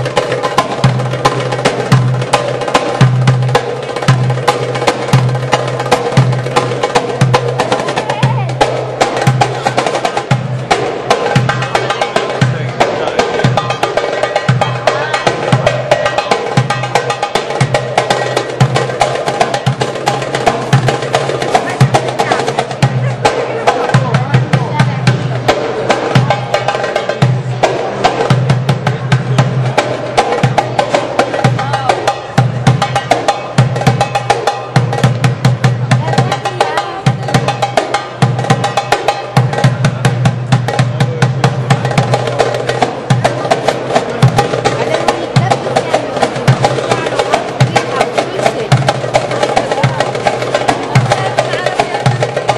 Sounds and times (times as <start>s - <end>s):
Wood block: 0.0s - 52.5s
Speech: 7.7s - 8.7s, 11.7s - 13.8s, 14.7s - 15.8s, 21.4s - 28.0s, 30.7s - 33.0s, 35.9s - 37.4s, 40.8s - 41.5s, 44.5s - 52.5s.